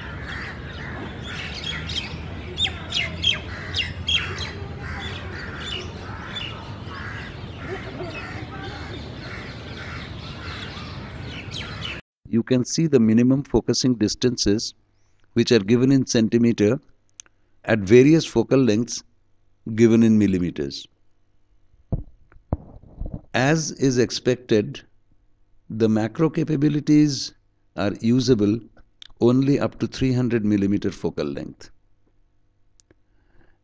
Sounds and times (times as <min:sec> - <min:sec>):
Chirp, tweet: 0:00.4 - 0:12.0.